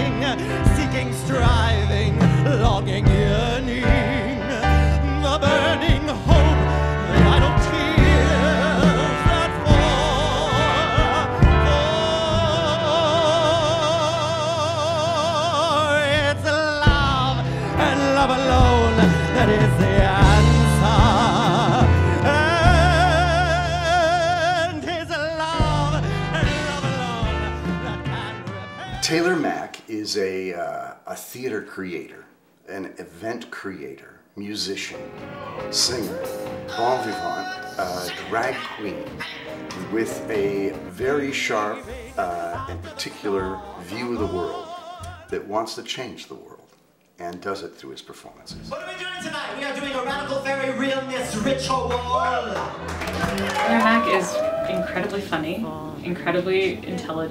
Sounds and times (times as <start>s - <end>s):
Music: 0.0s - 30.9s, 34.4s - 46.4s, 47.3s - 57.3s
Speech: 29.0s - 35.0s, 35.7s - 39.2s, 39.8s - 44.6s, 45.3s - 52.8s, 53.7s - 57.3s.